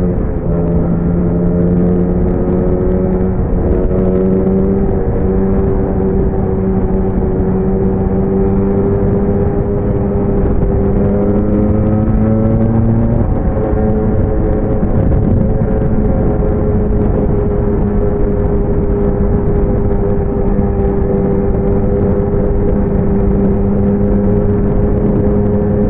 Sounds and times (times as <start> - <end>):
Car: 0.0 - 25.8
Motorcycle: 0.0 - 25.8.